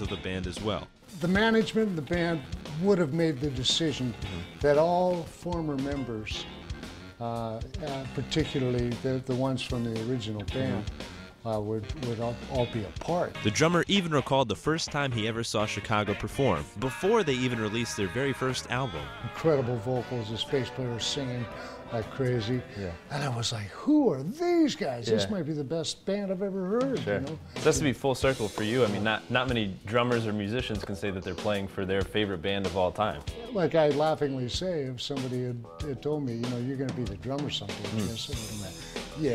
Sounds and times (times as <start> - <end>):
Speech: 0.0 - 6.4, 7.2 - 39.3
Rock and roll: 0.0 - 23.1, 26.8 - 39.3.